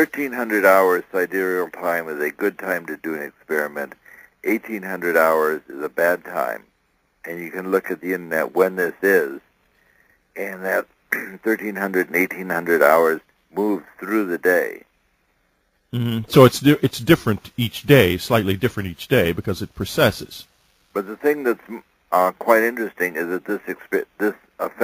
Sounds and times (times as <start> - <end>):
Speech: 0.0 - 6.6, 7.3 - 9.4, 10.4 - 14.9, 16.0 - 24.8.